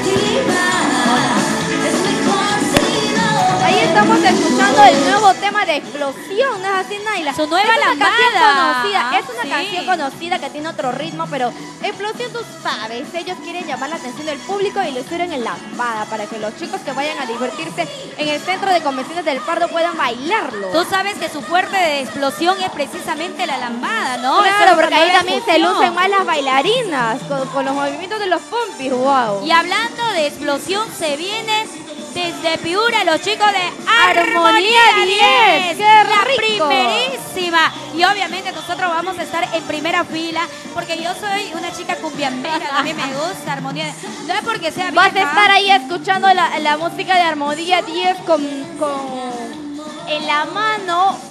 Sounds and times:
Music: 0:00.0 - 0:51.3.

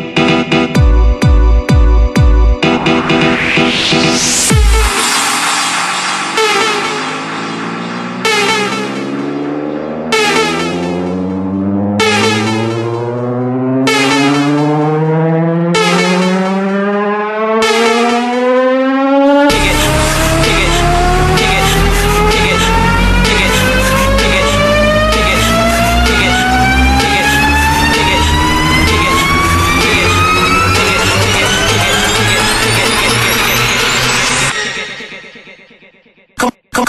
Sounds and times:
Music: 0:00.0 - 0:16.4, 0:19.3 - 0:36.4.

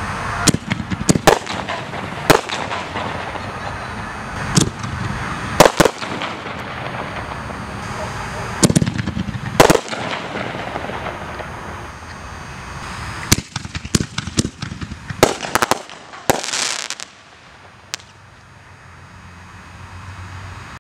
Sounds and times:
Fireworks: 0:00.0 - 0:18.4.

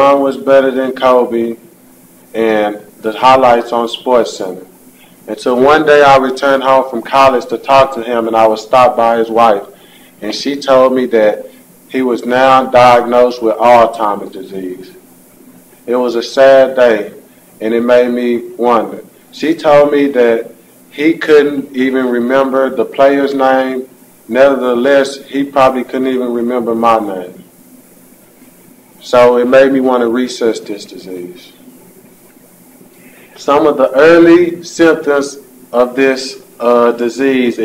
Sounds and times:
Male speech, man speaking: 0:00.0 - 0:01.6, 0:02.4 - 0:04.7, 0:05.3 - 0:15.0, 0:15.9 - 0:27.4, 0:29.0 - 0:31.6, 0:33.4 - 0:37.6
Narration, monologue: 0:00.0 - 0:37.6.

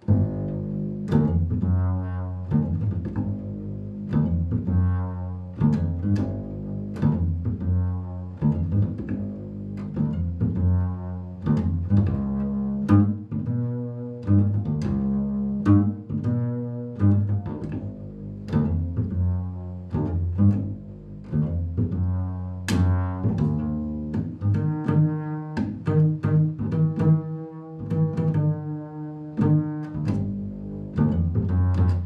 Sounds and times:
Cello: 0:00.0 - 0:32.0.

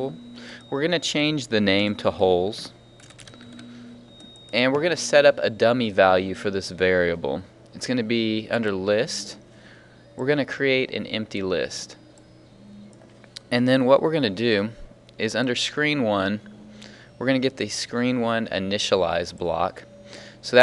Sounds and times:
Speech: 0:00.0 - 0:02.8, 0:04.5 - 0:09.4, 0:10.2 - 0:12.0, 0:13.4 - 0:16.4, 0:17.2 - 0:20.6.

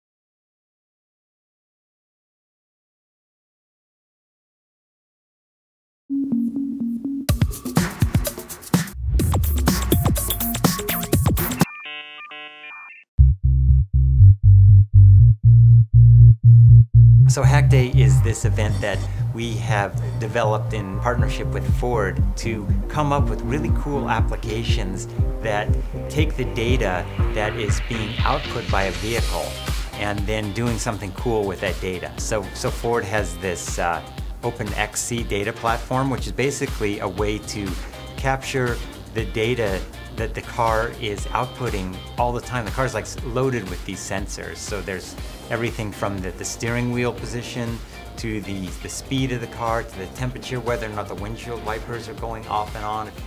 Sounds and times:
Music: 0:06.1 - 0:53.2.

